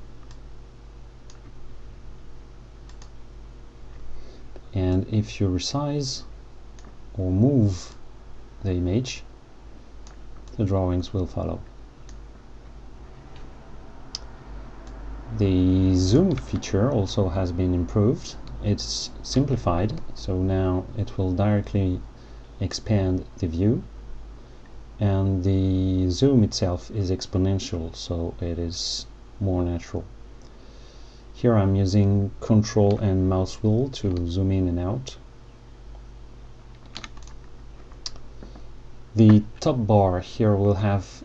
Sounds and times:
Computer keyboard: 0:36.7 - 0:38.2.

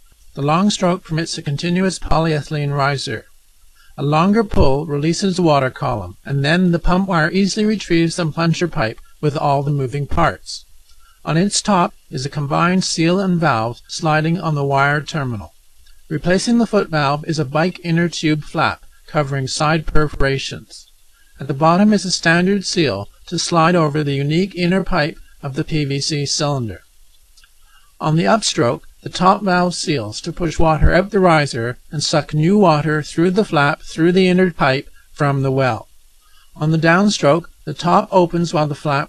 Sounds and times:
Speech: 0:00.4 - 0:03.3, 0:04.0 - 0:10.6, 0:11.3 - 0:26.8, 0:28.0 - 0:35.9, 0:36.6 - 0:39.0.

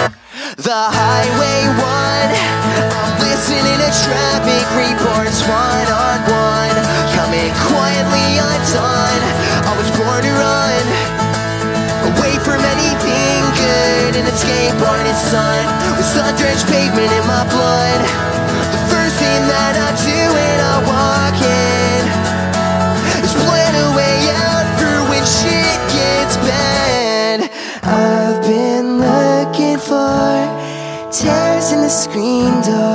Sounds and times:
Music: 0:00.0 - 0:00.2, 0:00.9 - 0:32.9.

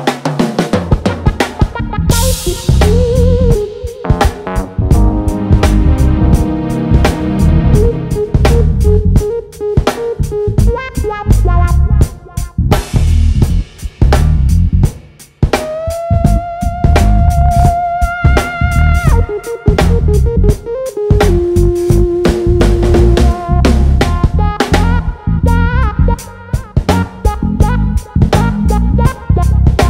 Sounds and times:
Music: 0:00.0 - 0:29.9.

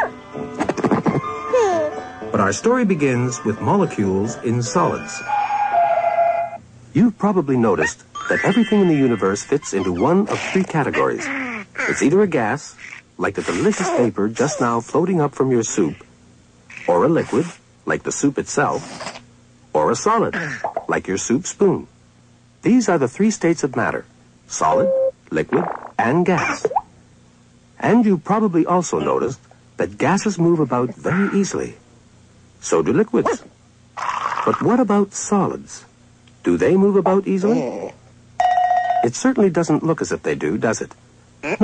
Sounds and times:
Speech: 0:02.3 - 0:05.2, 0:06.9 - 0:16.1, 0:16.8 - 0:18.9, 0:19.7 - 0:21.9, 0:22.6 - 0:26.7, 0:27.8 - 0:31.8, 0:32.6 - 0:33.5, 0:34.5 - 0:38.0, 0:39.0 - 0:41.6.

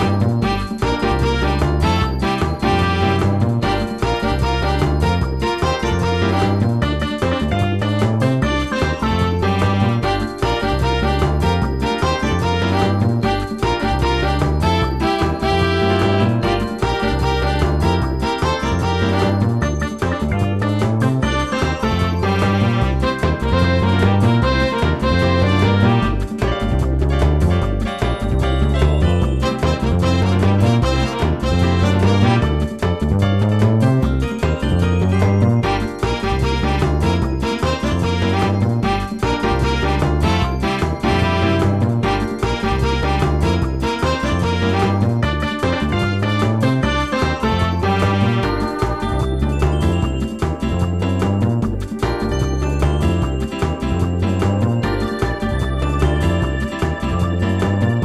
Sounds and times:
Music: 0:00.0 - 0:58.0.

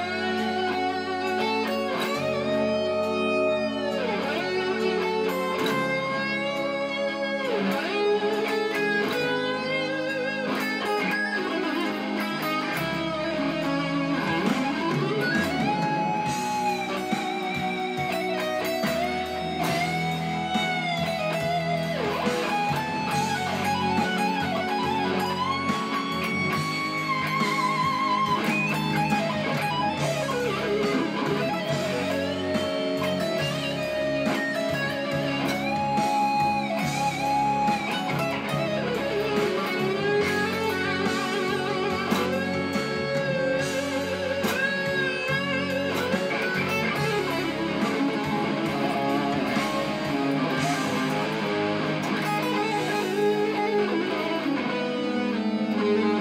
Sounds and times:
Electric guitar: 0:00.0 - 0:56.2.

